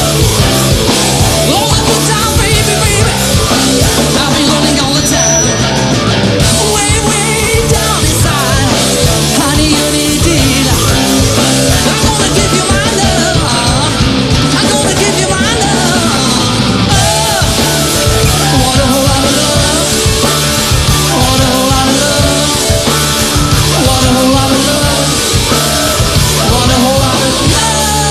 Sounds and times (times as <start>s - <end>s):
Heavy metal: 0.0s - 28.1s
Punk rock: 0.0s - 28.1s
Singing: 6.4s - 28.1s.